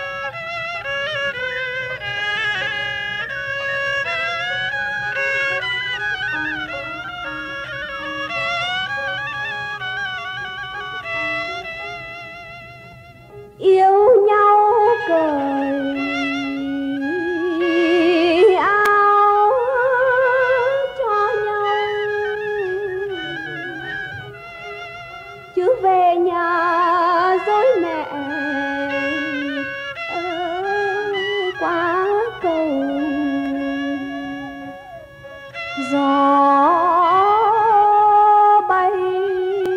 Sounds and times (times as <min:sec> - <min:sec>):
Music: 0:00.0 - 0:39.7.